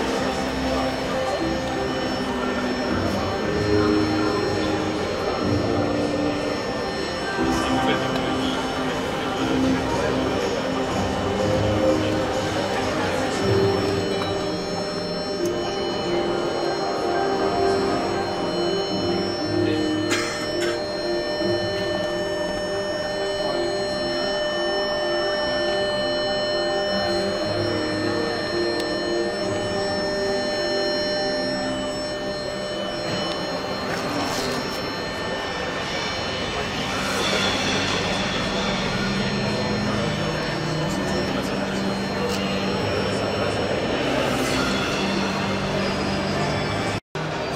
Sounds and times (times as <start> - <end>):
Music: 0.0 - 47.5.